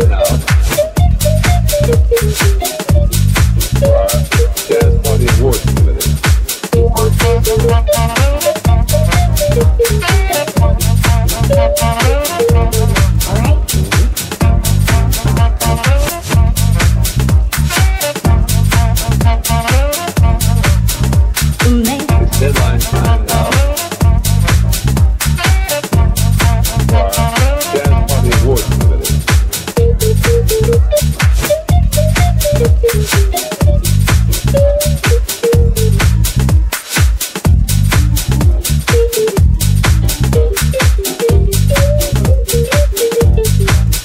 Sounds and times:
House music: 0:00.0 - 0:44.0.

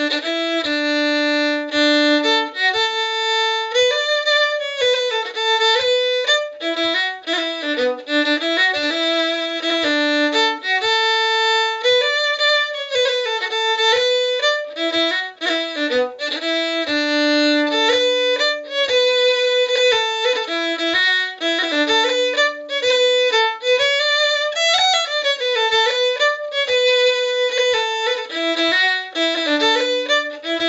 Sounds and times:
Violin, fiddle: 0:00.0 - 0:30.6.

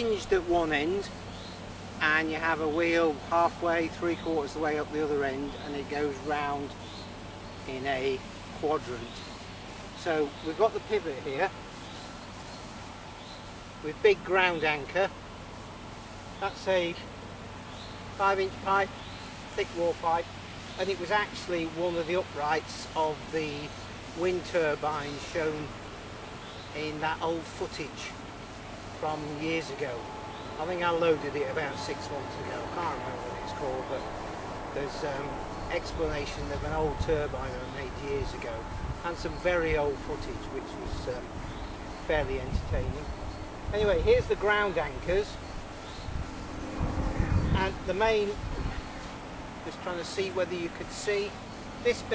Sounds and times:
Speech: 0:00.0 - 0:01.1, 0:02.0 - 0:06.8, 0:07.7 - 0:09.2, 0:10.0 - 0:11.5, 0:13.8 - 0:15.1, 0:16.4 - 0:17.1, 0:18.2 - 0:18.9, 0:19.6 - 0:25.8, 0:26.7 - 0:28.2, 0:29.0 - 0:34.1, 0:34.8 - 0:41.3, 0:42.0 - 0:43.1, 0:43.7 - 0:45.4, 0:47.6 - 0:48.8, 0:49.6 - 0:52.1
Rustling leaves: 0:00.0 - 0:52.1.

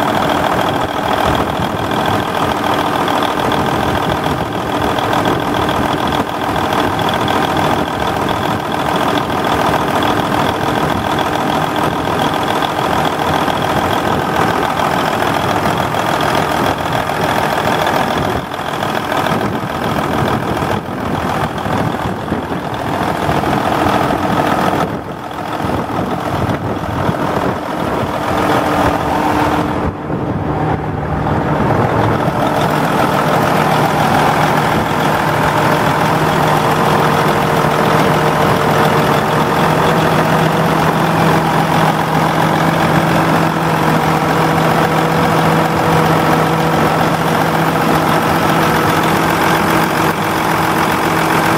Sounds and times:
Idling: 0:00.0 - 0:29.9, 0:31.5 - 0:51.5
Medium engine (mid frequency): 0:00.0 - 0:51.5
Vehicle: 0:00.0 - 0:51.5.

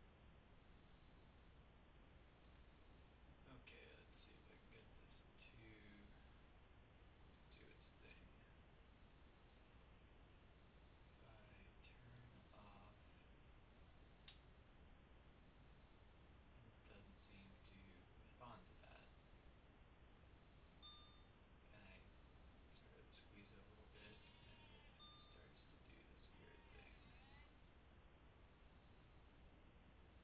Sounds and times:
Inside, small room: 0:00.0 - 0:30.2
Silence: 0:00.0 - 0:30.2
Speech: 0:03.5 - 0:06.3, 0:07.5 - 0:08.6, 0:11.2 - 0:13.2, 0:16.6 - 0:19.1, 0:21.7 - 0:22.1, 0:22.8 - 0:27.5.

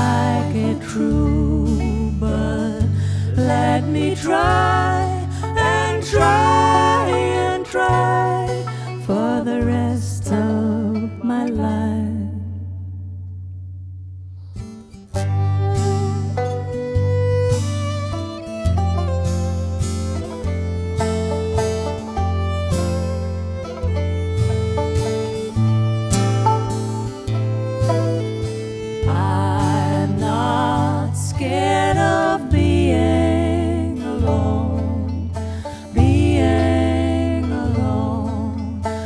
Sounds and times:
Singing: 0:00.0 - 0:11.8, 0:29.1 - 0:35.2
Guitar: 0:00.0 - 0:39.0.

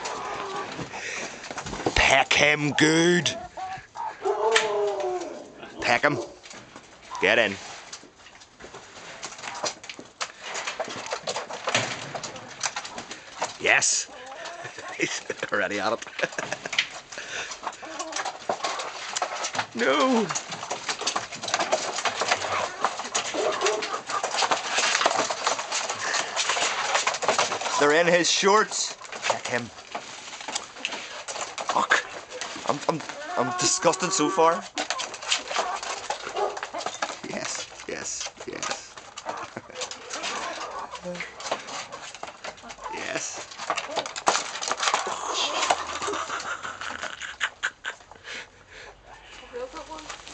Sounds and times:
Cluck: 0:02.5 - 0:06.2, 0:14.1 - 0:19.5, 0:21.0 - 0:27.9, 0:30.6 - 0:37.1, 0:38.5 - 0:43.2, 0:43.8 - 0:50.0.

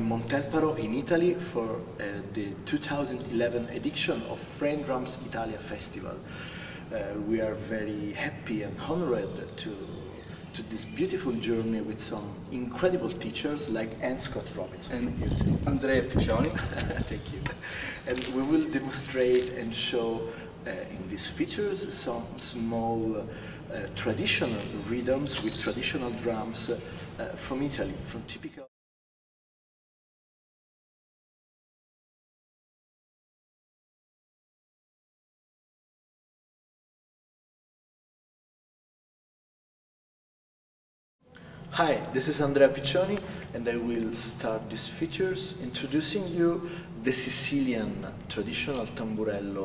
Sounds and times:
Speech: 0:00.0 - 0:06.3, 0:06.9 - 0:28.7, 0:41.7 - 0:49.6.

